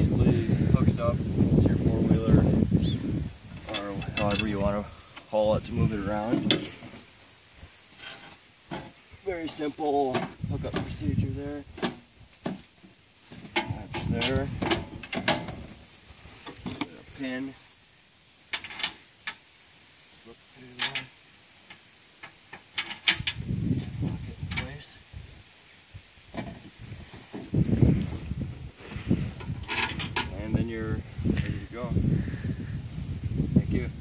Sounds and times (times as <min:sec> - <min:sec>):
Outside, urban or manmade: 0:00.0 - 0:34.0
Speech: 0:09.3 - 0:11.7, 0:16.9 - 0:17.6, 0:30.4 - 0:31.0.